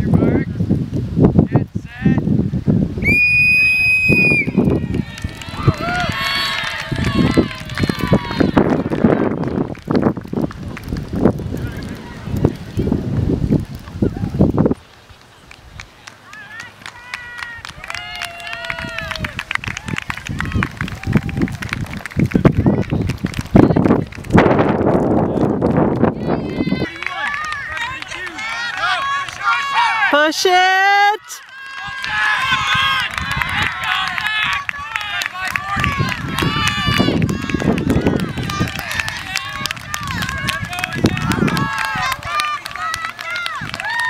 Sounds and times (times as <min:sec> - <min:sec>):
Outside, rural or natural: 0:00.0 - 0:44.0.